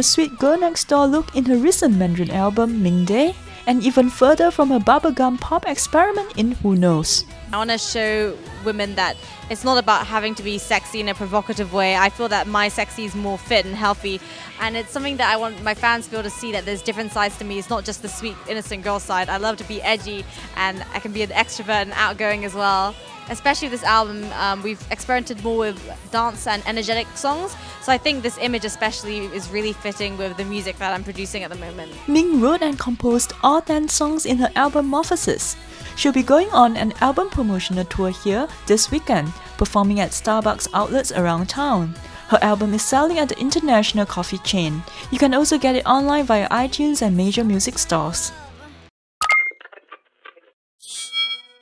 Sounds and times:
Speech: 0.0s - 48.8s
Music: 0.0s - 48.9s.

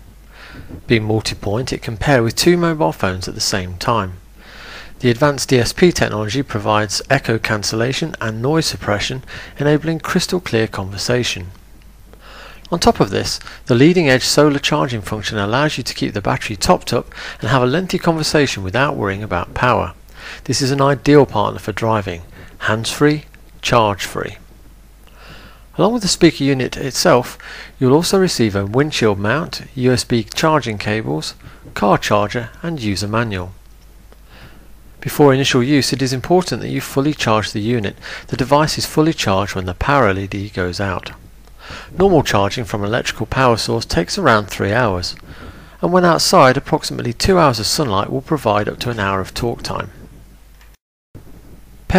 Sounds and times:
Speech: 0.7s - 4.2s, 5.0s - 11.6s, 12.7s - 24.4s, 25.7s - 33.6s, 35.0s - 41.2s, 41.9s - 45.2s, 45.8s - 50.0s.

